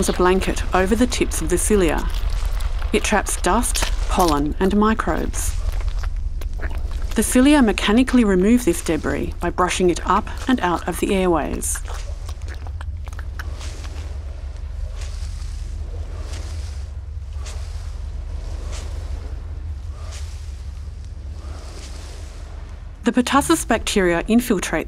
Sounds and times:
Speech: 0:00.0 - 0:02.2, 0:02.9 - 0:05.5, 0:07.2 - 0:11.9, 0:23.1 - 0:24.8.

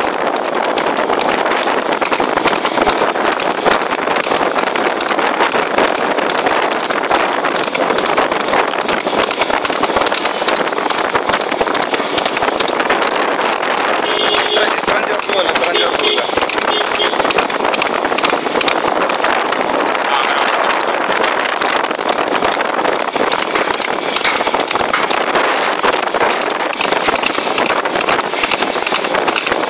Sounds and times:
Clip-clop: 0:00.0 - 0:29.6.

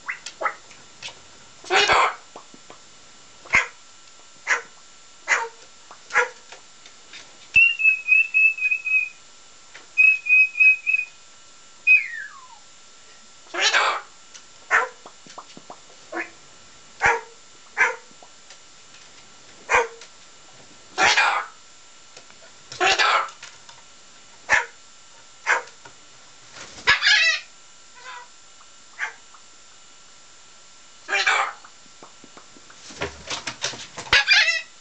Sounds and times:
Bark: 0:03.5 - 0:03.8, 0:04.4 - 0:06.4, 0:14.7 - 0:15.0, 0:17.0 - 0:18.1, 0:19.7 - 0:20.0, 0:21.0 - 0:21.6, 0:22.8 - 0:23.3, 0:24.5 - 0:24.8, 0:25.4 - 0:25.8, 0:29.0 - 0:29.2.

